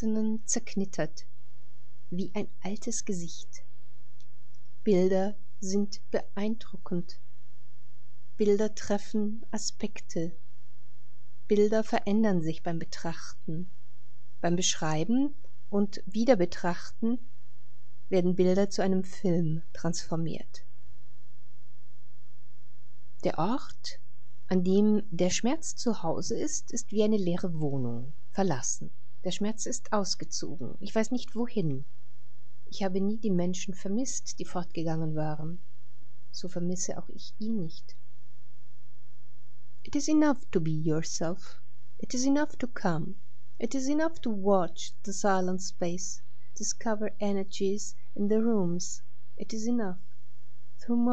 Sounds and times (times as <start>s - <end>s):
Speech: 0.0s - 1.2s, 2.2s - 3.6s, 4.9s - 7.2s, 8.4s - 10.3s, 11.5s - 13.7s, 14.4s - 17.2s, 18.2s - 20.6s, 23.3s - 31.8s, 32.8s - 35.6s, 36.4s - 37.9s, 39.9s - 50.0s, 50.8s - 51.1s.